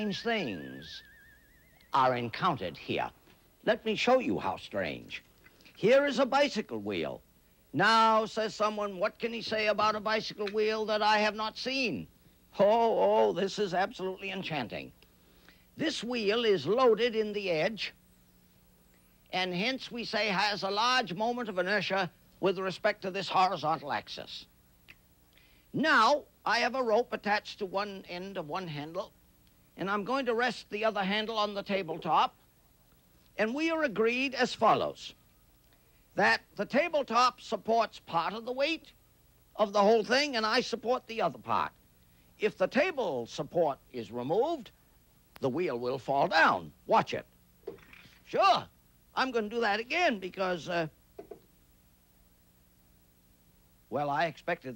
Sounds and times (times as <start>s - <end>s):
Speech: 0.0s - 1.0s, 2.0s - 7.2s, 7.8s - 15.0s, 15.8s - 18.0s, 19.3s - 24.5s, 25.8s - 29.1s, 29.8s - 32.4s, 33.4s - 35.2s, 36.2s - 39.0s, 39.6s - 41.8s, 42.4s - 44.8s, 45.4s - 47.3s, 48.2s - 51.0s, 53.9s - 54.7s.